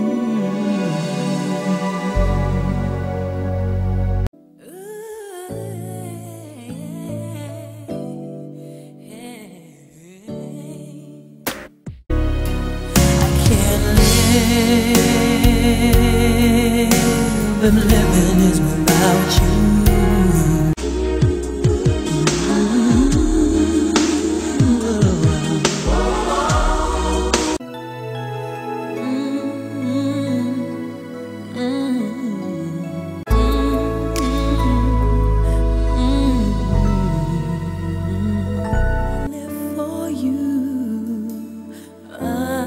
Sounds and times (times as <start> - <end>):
Soundtrack music: 0.0 - 4.3, 12.1 - 39.4
Independent music: 0.0 - 4.8, 5.4 - 42.6.